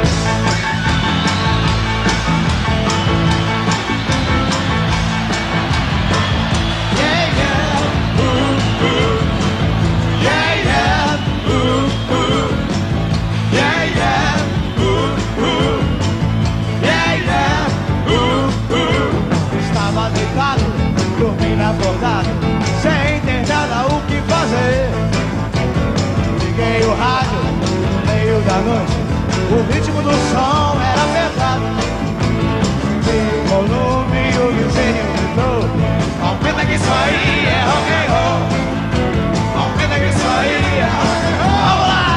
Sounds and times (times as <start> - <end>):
Blues: 0.0 - 42.1.